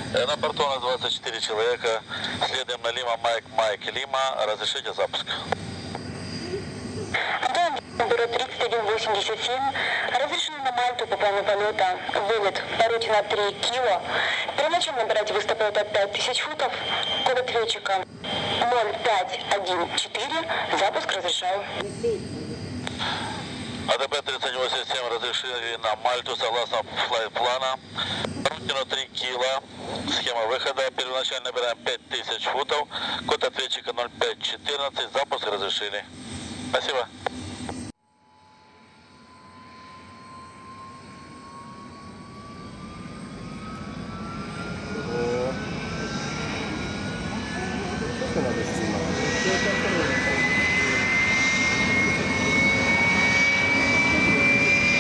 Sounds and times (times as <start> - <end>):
Speech: 0.1 - 5.4, 28.5 - 36.1.